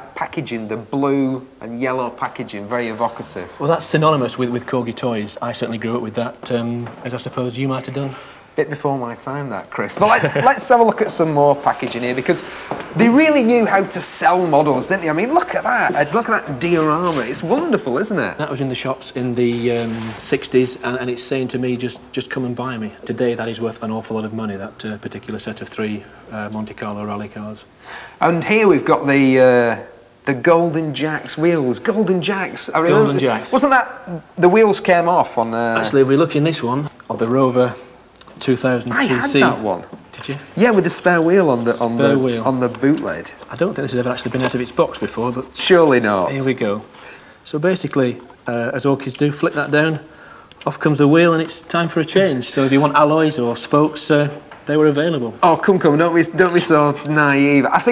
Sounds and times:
Speech: 0.0 - 46.9, 47.5 - 57.9.

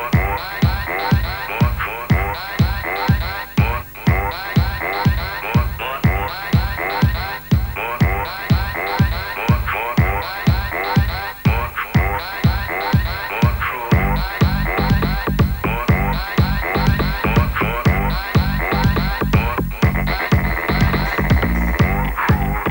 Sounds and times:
Music: 0.0 - 22.7.

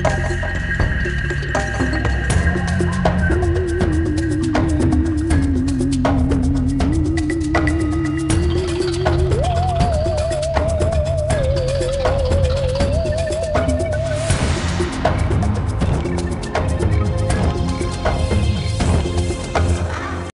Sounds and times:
Soundtrack music: 0.0 - 20.3.

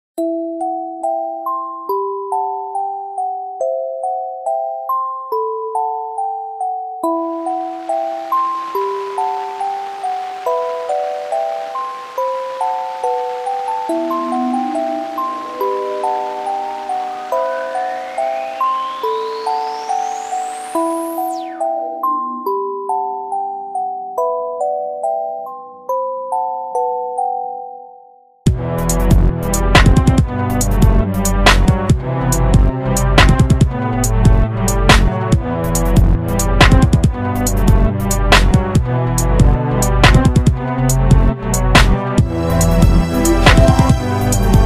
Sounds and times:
Music: 0.2 - 44.6.

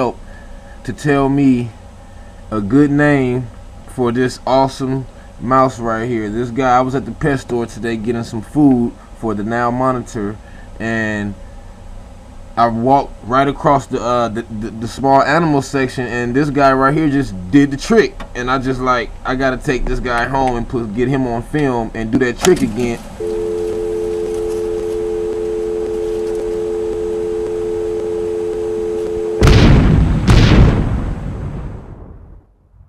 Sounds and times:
Speech: 0.0 - 0.2, 0.8 - 1.8, 2.5 - 11.4, 12.6 - 23.0.

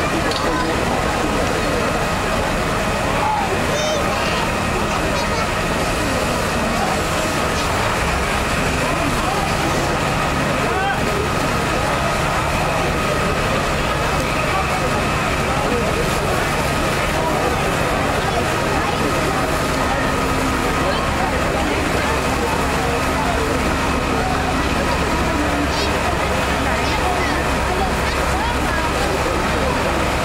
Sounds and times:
Speech: 0.0 - 30.2.

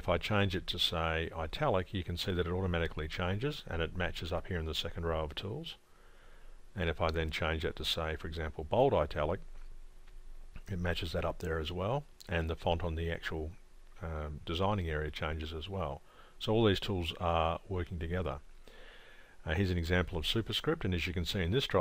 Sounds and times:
Speech: 0.0 - 5.8, 6.8 - 9.5, 10.6 - 18.4, 19.4 - 21.8.

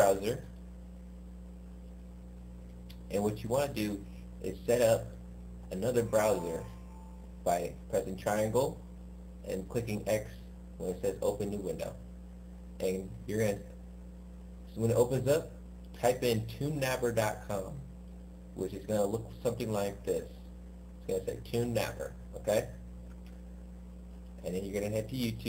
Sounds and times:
Speech: 0.0 - 0.6, 3.0 - 6.8, 7.4 - 8.8, 9.4 - 12.0, 12.8 - 13.8, 14.7 - 18.0, 18.6 - 20.4, 21.0 - 22.8, 24.4 - 25.4.

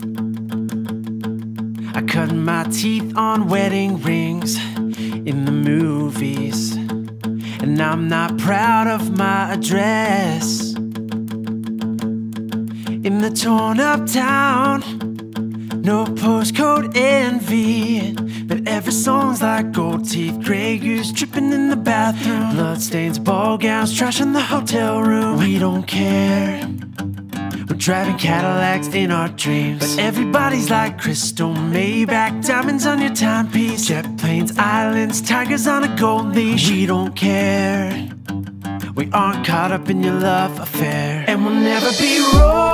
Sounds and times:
Music: 0.0 - 42.7.

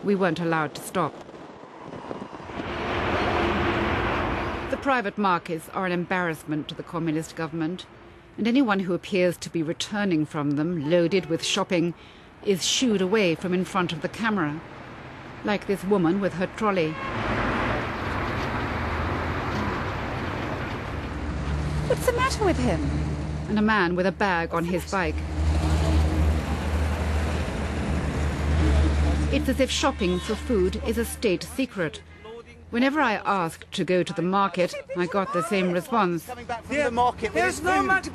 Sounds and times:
Outside, urban or manmade: 0.0 - 38.1
Speech: 23.5 - 25.2, 29.3 - 38.1.

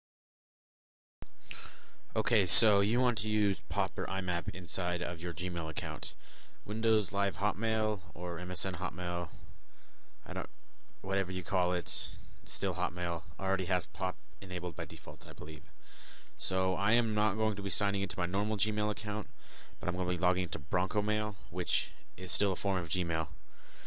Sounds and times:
Speech: 2.2 - 9.4, 10.2 - 15.7, 16.4 - 23.4.

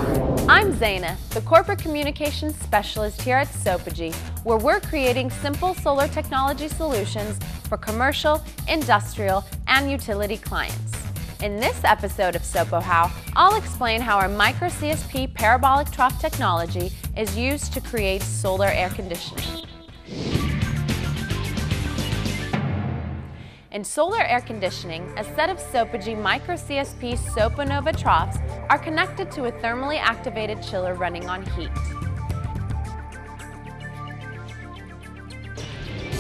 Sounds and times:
Music: 0.0 - 36.2
Speech: 0.5 - 19.6, 23.8 - 31.9.

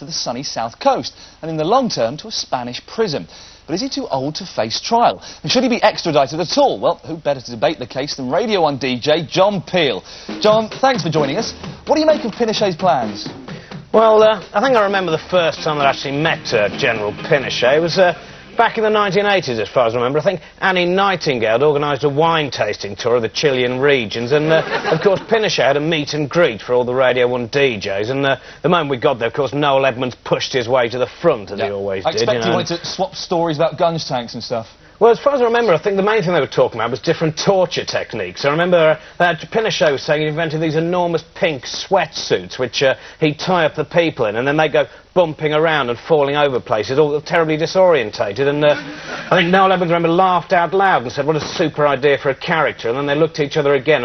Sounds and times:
Speech: 0.0 - 13.3, 13.9 - 54.0.

